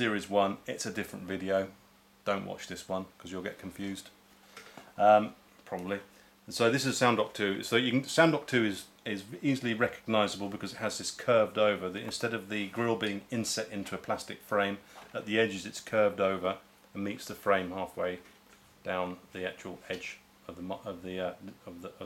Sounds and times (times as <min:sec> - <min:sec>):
Speech: 0:00.0 - 0:04.2, 0:05.0 - 0:22.0.